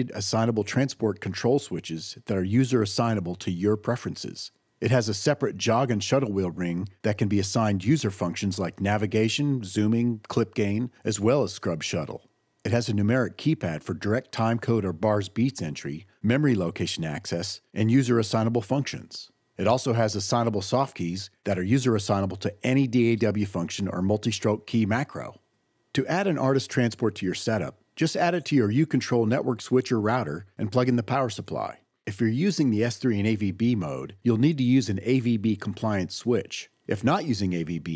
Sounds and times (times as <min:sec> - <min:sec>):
Speech: 0:00.0 - 0:37.9.